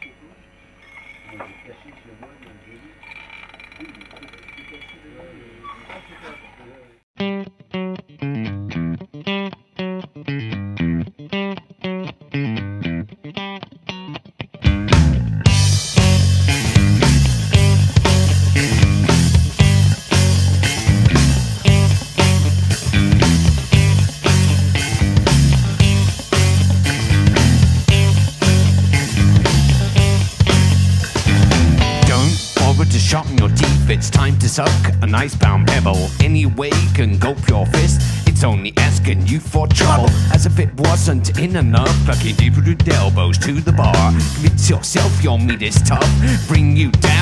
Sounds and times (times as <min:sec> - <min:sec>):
Music: 0:07.2 - 0:47.2.